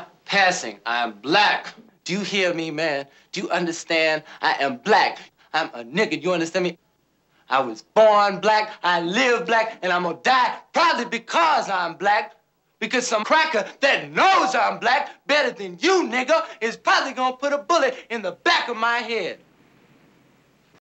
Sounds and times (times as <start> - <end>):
Speech: 0.0 - 6.8, 7.5 - 19.4.